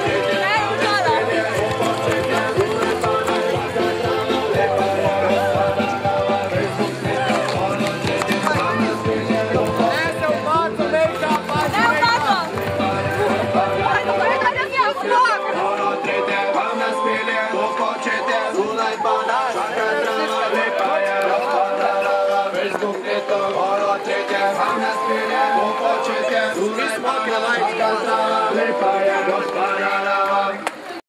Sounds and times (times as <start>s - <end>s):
Music: 0.0s - 31.0s.